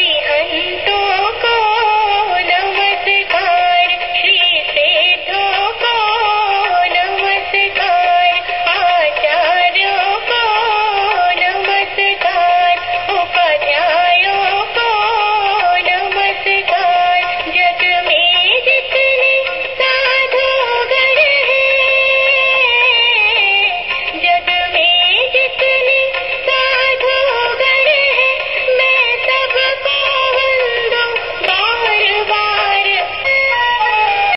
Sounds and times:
Mantra: 0.0 - 33.1.

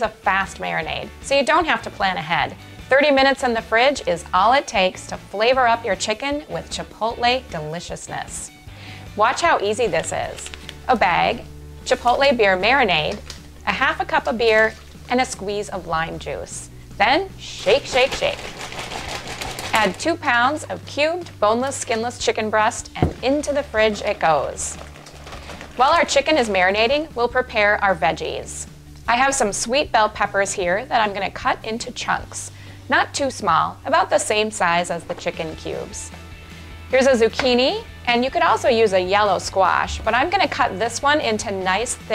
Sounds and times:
Speech: 0.0 - 8.5, 9.2 - 18.4, 19.7 - 24.8, 25.8 - 36.1, 36.9 - 42.1
Music: 0.0 - 42.1.

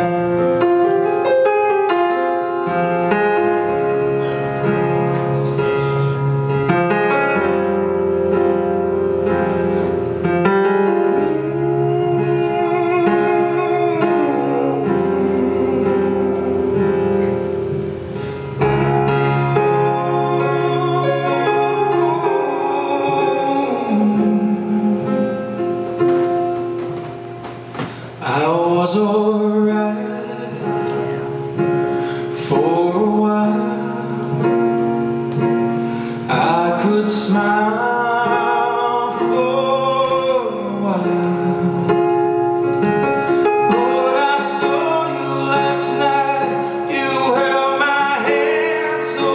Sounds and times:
Music: 0.0 - 49.3.

